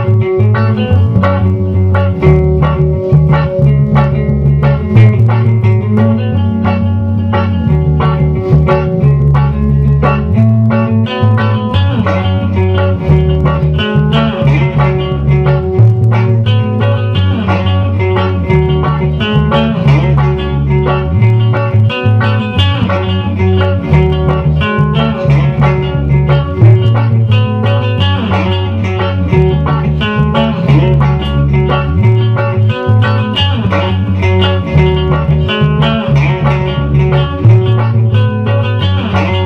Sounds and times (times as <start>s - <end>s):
Acoustic guitar: 0.0s - 39.4s.